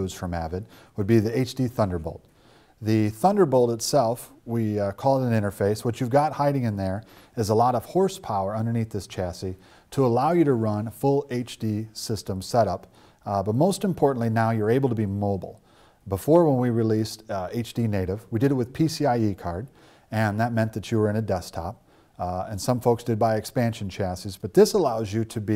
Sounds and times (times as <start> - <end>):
Speech: 0.0 - 25.5.